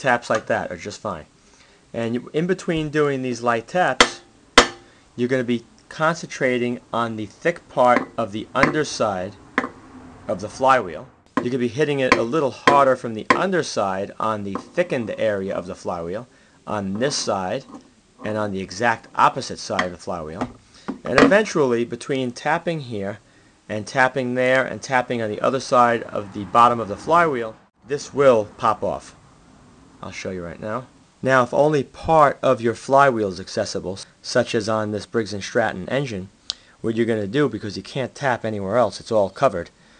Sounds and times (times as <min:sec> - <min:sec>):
Speech: 0:00.0 - 0:01.3, 0:02.0 - 0:04.2, 0:05.2 - 0:09.4, 0:10.3 - 0:20.5, 0:21.1 - 0:29.2, 0:30.0 - 0:39.7
Tools: 0:08.0 - 0:08.8, 0:17.0 - 0:17.9.